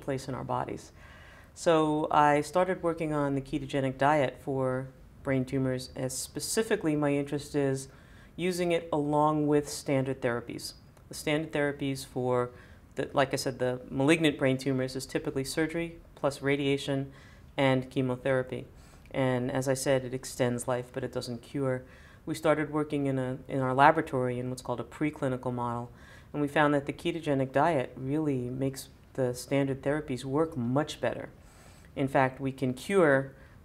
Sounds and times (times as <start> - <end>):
Speech: 0.0 - 1.0, 1.6 - 31.4, 32.0 - 33.4
Inside, small room: 0.0 - 33.6.